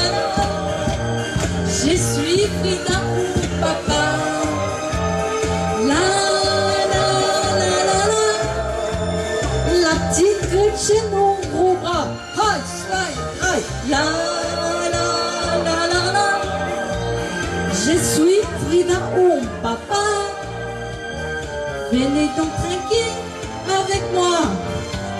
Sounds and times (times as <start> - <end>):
Singing: 0.0 - 5.2, 5.8 - 9.1, 13.8 - 20.4
Music: 0.0 - 25.1.